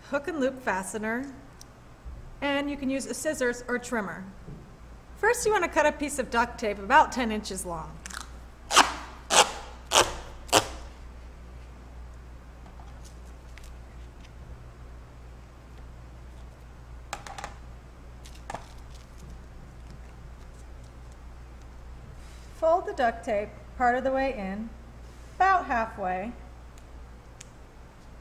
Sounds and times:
Speech: 0:00.0 - 0:01.4, 0:02.4 - 0:04.3, 0:05.2 - 0:08.0, 0:22.6 - 0:24.8, 0:25.4 - 0:26.4.

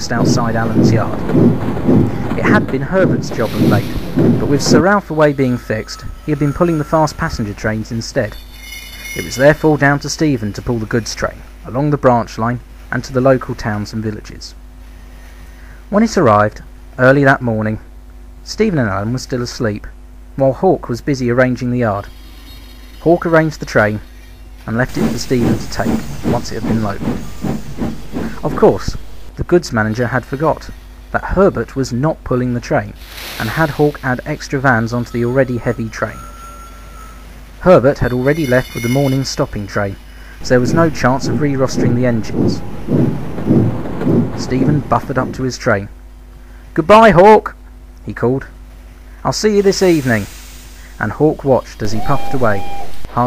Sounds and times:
Speech: 0:00.0 - 0:01.2, 0:02.4 - 0:08.4, 0:09.2 - 0:14.6, 0:15.9 - 0:22.1, 0:23.0 - 0:24.0, 0:24.7 - 0:27.0, 0:28.4 - 0:36.2, 0:37.6 - 0:42.6, 0:44.4 - 0:46.0, 0:46.8 - 0:48.6, 0:49.2 - 0:50.3, 0:51.0 - 0:53.2.

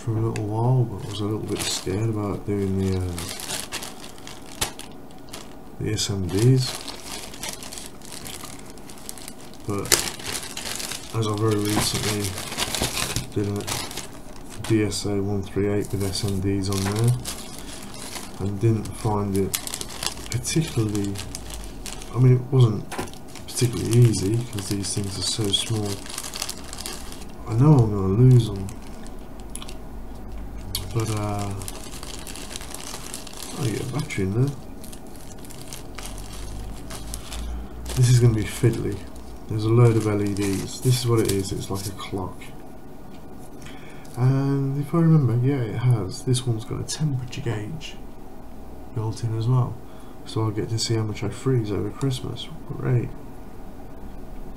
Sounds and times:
Speech: 0:00.0 - 0:03.4, 0:05.8 - 0:06.8, 0:09.7 - 0:10.0, 0:11.1 - 0:14.0, 0:14.6 - 0:17.4, 0:18.4 - 0:19.6, 0:20.3 - 0:21.3, 0:22.1 - 0:22.9, 0:23.5 - 0:26.0, 0:27.4 - 0:28.8, 0:30.6 - 0:31.8, 0:33.5 - 0:34.6, 0:37.9 - 0:42.6, 0:44.1 - 0:48.1, 0:48.9 - 0:53.2.

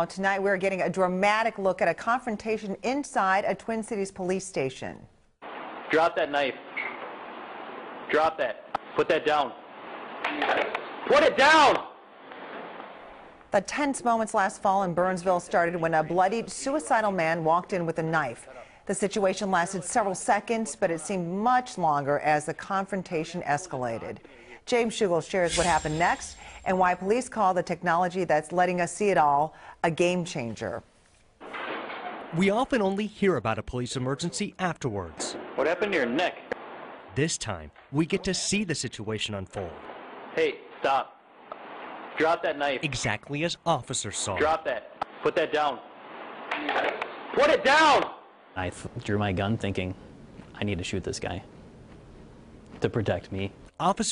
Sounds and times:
Speech: 0:32.4 - 0:36.4, 0:37.2 - 0:39.8, 0:42.2 - 0:45.8, 0:48.6 - 0:50.0, 0:50.6 - 0:51.5, 0:52.8 - 0:54.1.

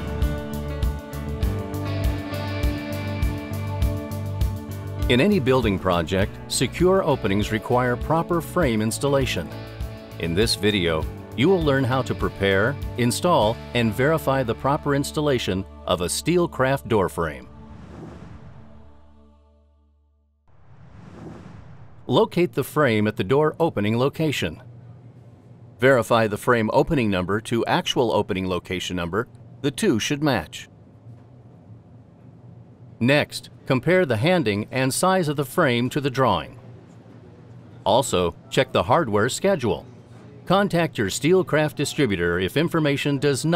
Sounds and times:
Speech: 0:05.1 - 0:09.5, 0:10.2 - 0:17.5, 0:22.1 - 0:24.7, 0:25.8 - 0:30.7, 0:33.0 - 0:36.6, 0:37.9 - 0:43.5.

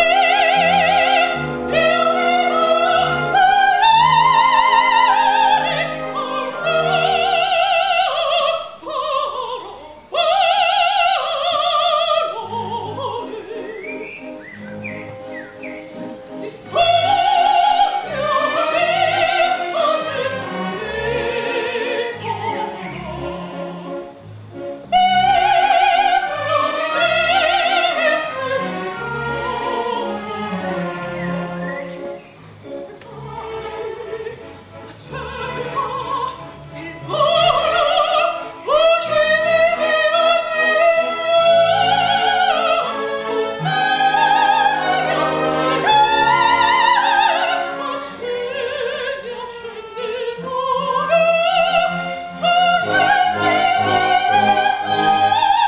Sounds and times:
Opera: 0:00.0 - 0:55.6.

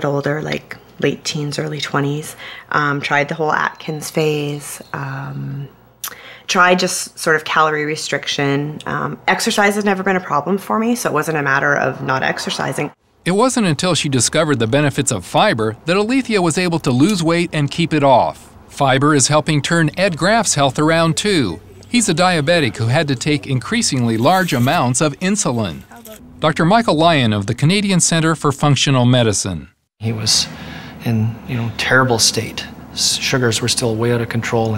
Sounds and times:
Speech: 0:00.0 - 0:05.7, 0:06.5 - 0:34.7.

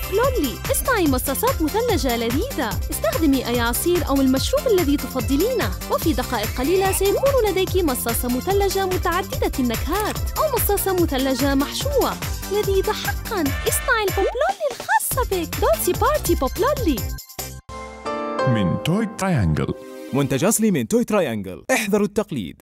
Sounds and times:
Speech: 0:00.0 - 0:17.0, 0:18.5 - 0:22.6
Music: 0:00.0 - 0:20.8.

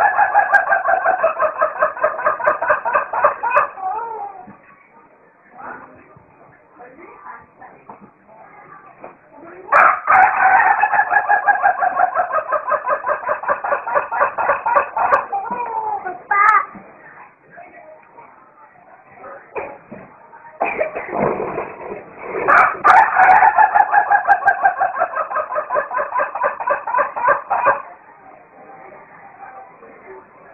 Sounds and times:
Crowing, cock-a-doodle-doo: 0:09.8 - 0:11.6, 0:22.6 - 0:24.1.

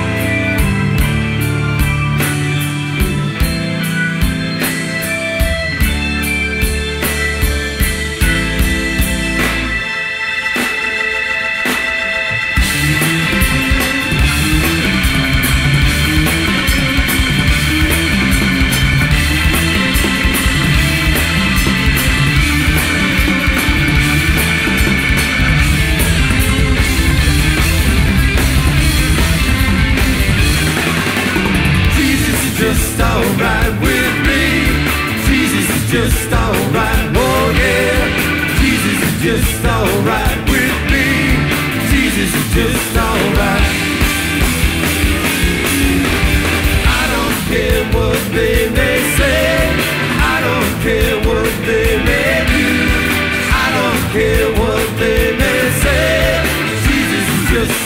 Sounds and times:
Drum kit: 0:00.0 - 0:57.8
Guitar: 0:00.0 - 0:57.8
Punk rock: 0:00.0 - 0:57.8.

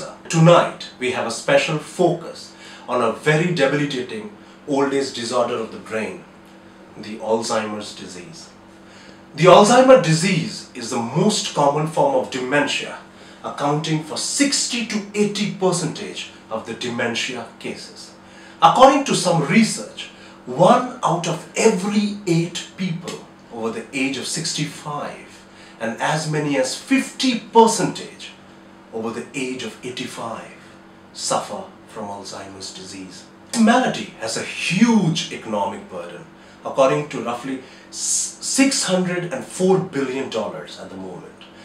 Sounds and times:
Speech: 0:00.0 - 0:06.3, 0:07.0 - 0:08.6, 0:09.3 - 0:41.6.

